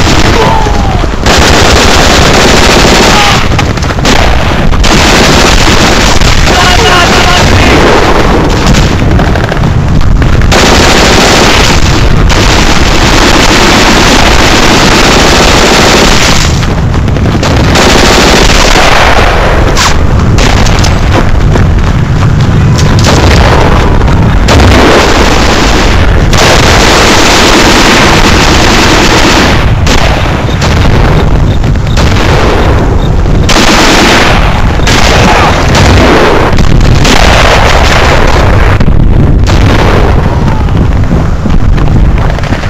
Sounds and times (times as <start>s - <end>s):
Machine gun: 0.0s - 42.6s.